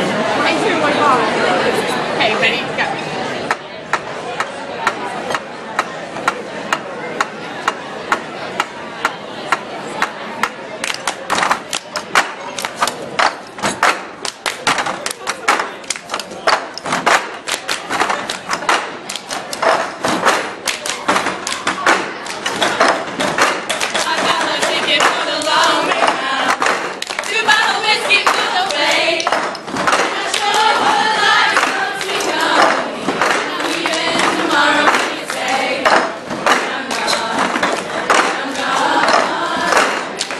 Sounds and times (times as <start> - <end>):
Speech: 0.0 - 13.2
Crowd: 0.0 - 40.3.